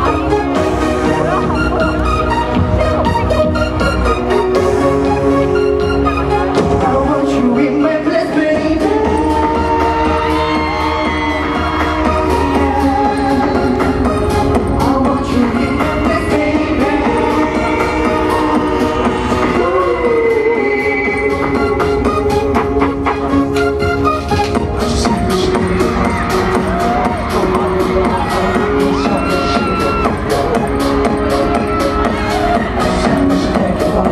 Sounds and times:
Music: 0:00.0 - 0:34.1
Singing: 0:06.5 - 0:22.9, 0:24.7 - 0:34.1.

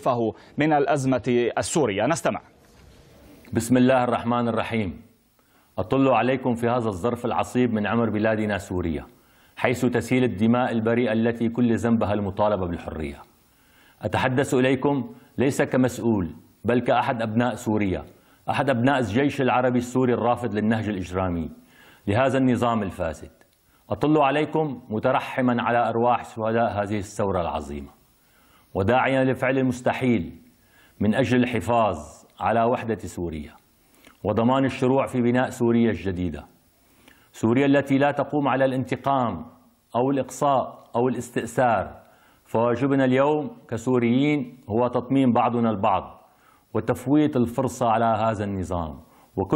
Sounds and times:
Speech: 0:00.0 - 0:02.5, 0:03.5 - 0:05.1, 0:05.8 - 0:13.3, 0:14.0 - 0:28.0, 0:28.8 - 0:30.4, 0:31.0 - 0:33.6, 0:34.2 - 0:36.6, 0:37.4 - 0:49.5.

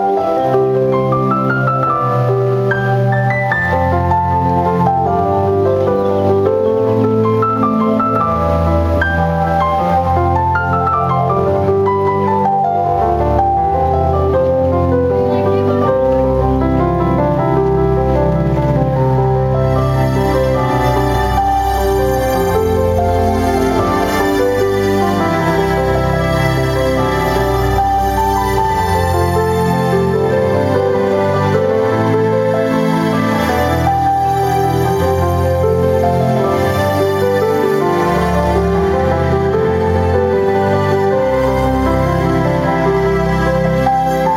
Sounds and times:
Music: 0:00.0 - 0:44.3.

